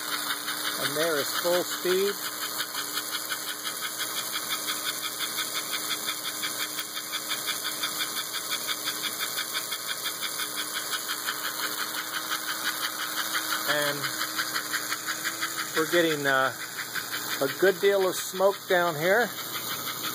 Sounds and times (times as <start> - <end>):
Engine: 0.0 - 20.1
Speech: 0.8 - 2.2, 13.7 - 14.1, 15.8 - 16.6, 17.4 - 19.3.